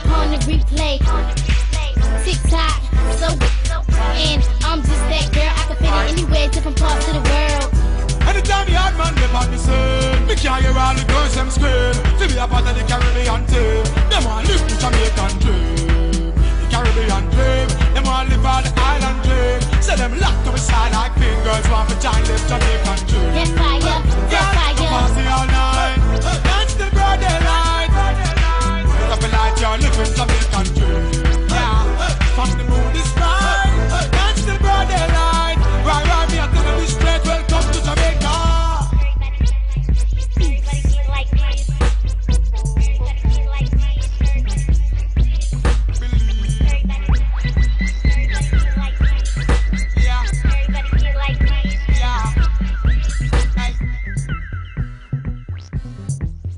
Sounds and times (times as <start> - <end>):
Reggae: 0.0 - 56.5.